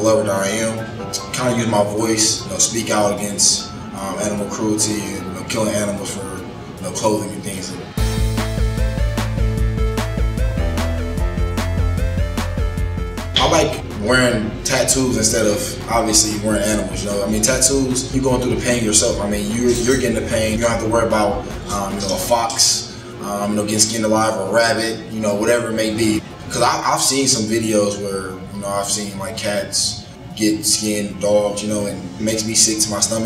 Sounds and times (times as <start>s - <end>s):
Speech: 0.0s - 7.9s, 13.4s - 33.2s
Music: 0.0s - 33.2s.